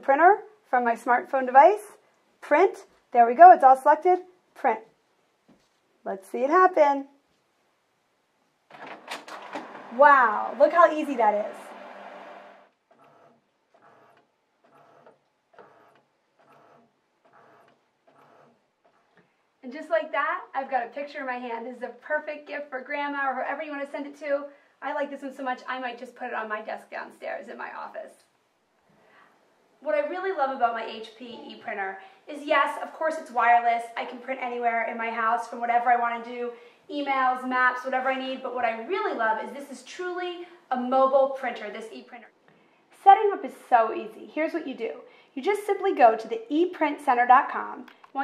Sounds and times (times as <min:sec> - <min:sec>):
Speech: 0:00.0 - 0:04.9, 0:06.0 - 0:07.2, 0:10.0 - 0:11.7, 0:19.6 - 0:28.3, 0:29.8 - 0:42.3, 0:43.0 - 0:48.2
Printer: 0:09.2 - 0:10.0, 0:11.5 - 0:18.5.